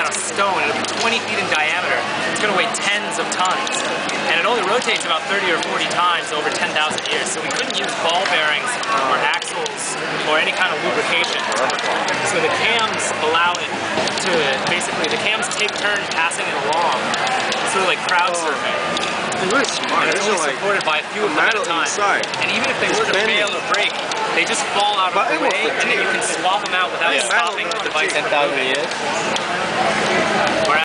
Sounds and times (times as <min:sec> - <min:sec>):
Speech: 0:00.0 - 0:17.0, 0:17.7 - 0:30.8.